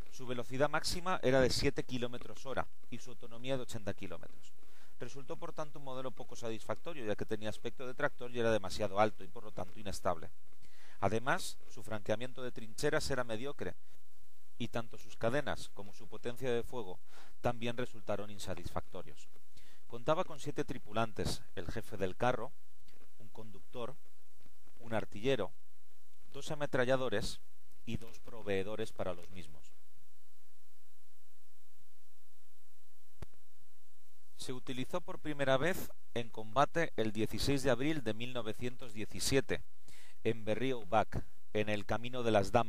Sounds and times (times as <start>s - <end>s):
Speech: 0.0s - 10.3s, 11.0s - 13.8s, 14.6s - 19.3s, 19.9s - 22.5s, 23.2s - 24.0s, 24.8s - 25.5s, 26.3s - 29.8s, 34.4s - 39.6s, 40.2s - 42.6s.